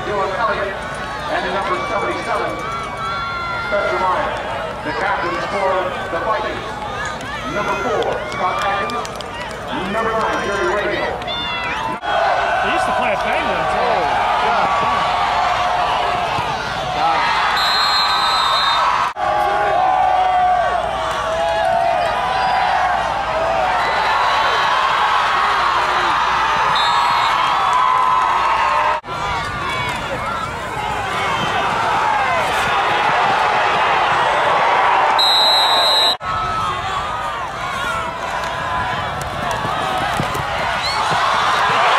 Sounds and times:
Speech: 12.6 - 14.7.

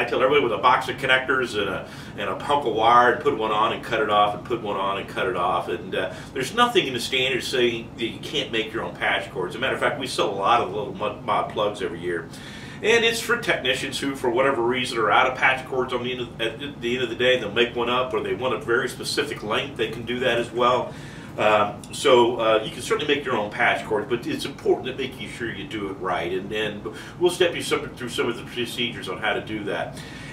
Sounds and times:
Speech: 0.0 - 30.0.

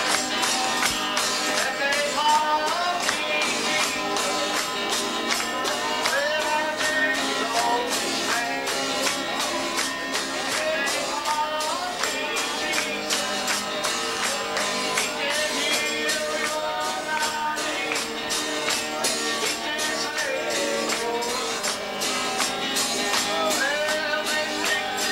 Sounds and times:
Music: 0.0 - 25.1.

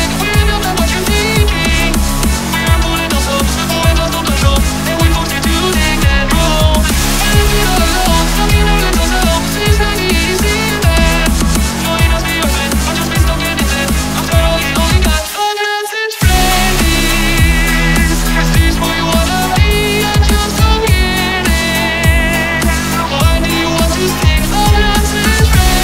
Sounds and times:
Soundtrack music: 0.0 - 15.5, 16.2 - 25.8.

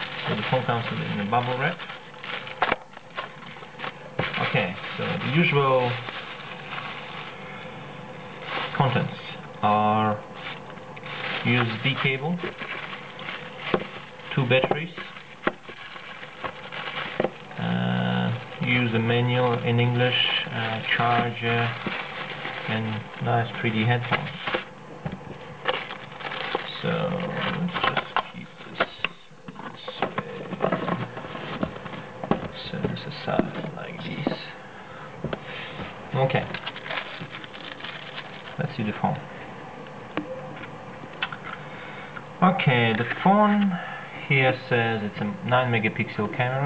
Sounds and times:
Speech: 0.2 - 1.9, 4.4 - 6.1, 8.7 - 10.2, 11.4 - 12.5, 14.3 - 15.2, 17.6 - 21.9, 22.7 - 24.6, 26.7 - 31.0, 32.5 - 34.6, 36.1 - 36.6, 38.6 - 39.2, 42.4 - 46.6.

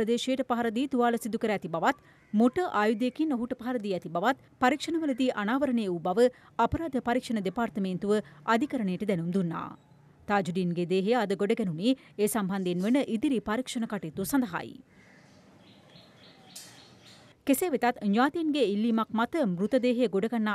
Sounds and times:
Chirp, tweet: 15.6 - 17.4.

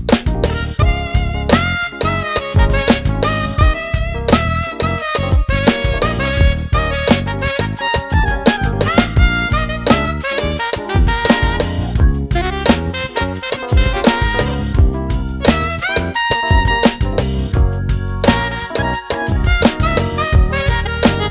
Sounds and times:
Electric piano: 0.0 - 21.3.

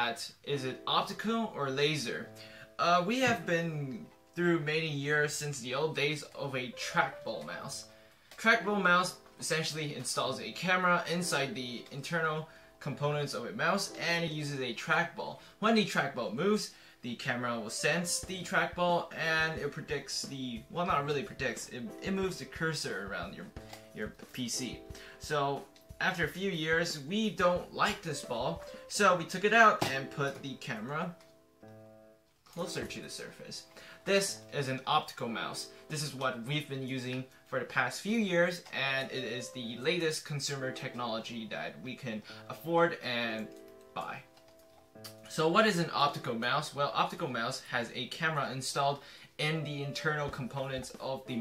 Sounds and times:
Speech: 0.0 - 31.2, 32.6 - 44.3, 45.3 - 51.4.

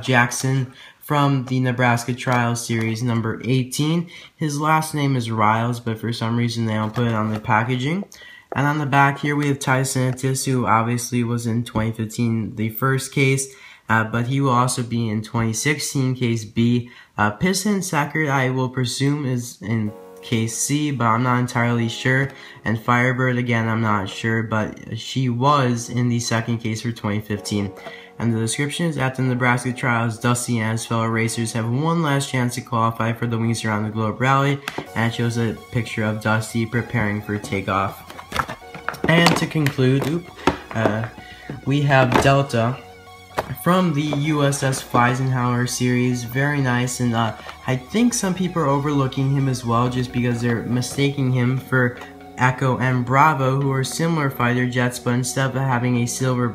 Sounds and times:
Music: 0.0 - 12.9, 18.0 - 56.5
Speech: 0.0 - 56.5.

